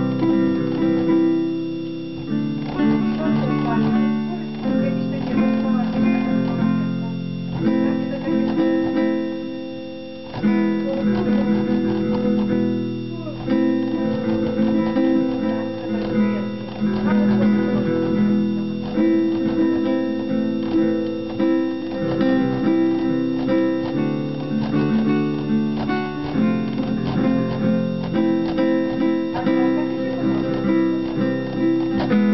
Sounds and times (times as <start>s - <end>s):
Guitar: 0.0s - 32.3s.